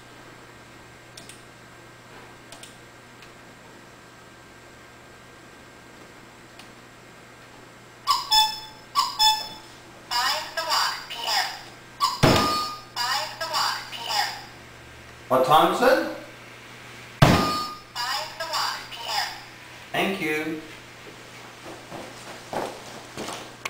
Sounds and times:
Speech: 0:10.1 - 0:11.7, 0:13.0 - 0:14.5, 0:15.3 - 0:16.3, 0:18.0 - 0:20.7.

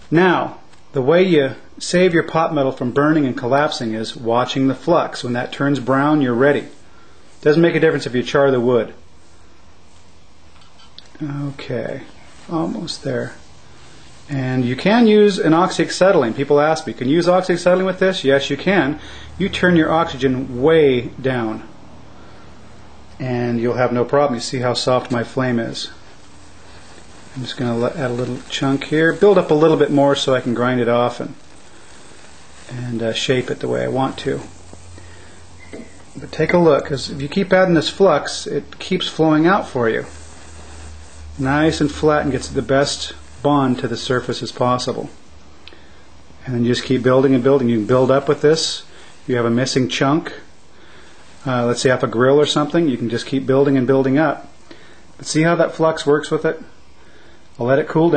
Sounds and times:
Speech: 0:00.1 - 0:06.8, 0:07.4 - 0:09.0, 0:11.1 - 0:13.4, 0:14.3 - 0:21.7, 0:23.2 - 0:26.0, 0:27.3 - 0:31.4, 0:32.7 - 0:34.6, 0:36.2 - 0:40.2, 0:41.4 - 0:45.2, 0:46.4 - 0:50.5, 0:51.4 - 0:54.5, 0:55.2 - 0:56.7, 0:57.6 - 0:58.1.

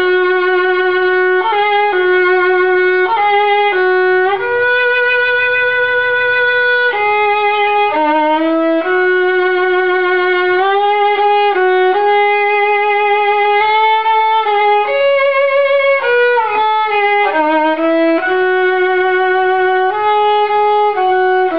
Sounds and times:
Violin, fiddle: 0:00.0 - 0:21.5.

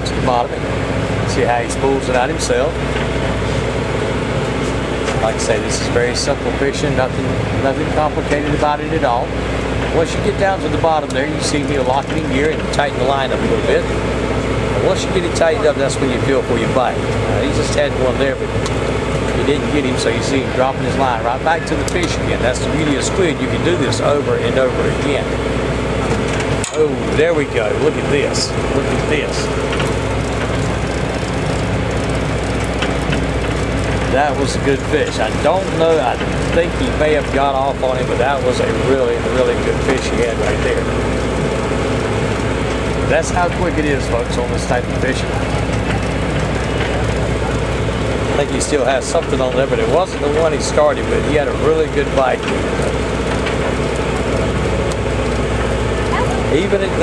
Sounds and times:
Speech: 0:00.0 - 0:00.7, 0:01.3 - 0:02.8, 0:05.1 - 0:14.0, 0:14.8 - 0:18.6, 0:19.3 - 0:25.4, 0:26.7 - 0:29.5, 0:34.1 - 0:41.0, 0:43.1 - 0:46.0, 0:48.3 - 0:52.7, 0:56.1 - 0:57.0
Motorboat, speedboat: 0:00.0 - 0:57.0.

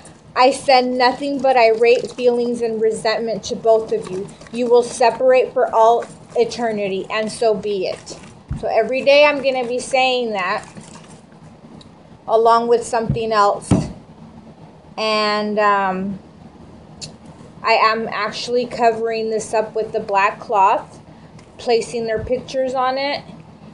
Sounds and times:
Speech: 0:00.4 - 0:10.7, 0:12.3 - 0:13.9, 0:15.0 - 0:16.2, 0:17.6 - 0:21.0, 0:21.6 - 0:23.3.

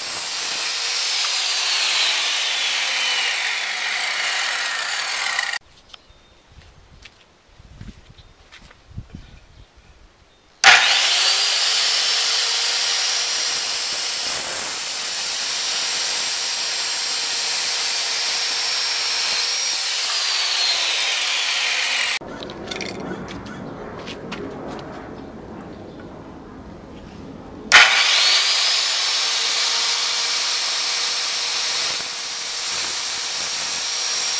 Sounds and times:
Outside, urban or manmade: 0:00.0 - 0:34.3.

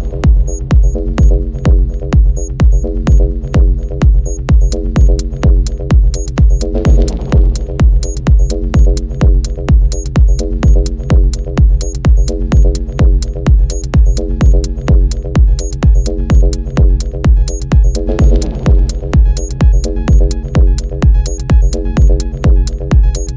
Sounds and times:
Music: 0:00.0 - 0:23.3.

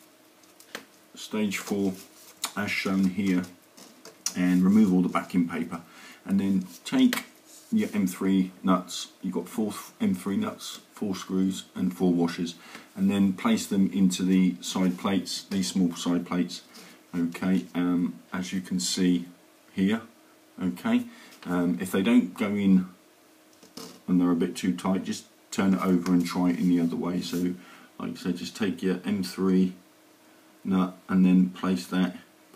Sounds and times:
Speech: 0:01.2 - 0:03.6, 0:04.3 - 0:23.0, 0:24.1 - 0:29.8, 0:30.6 - 0:32.3.

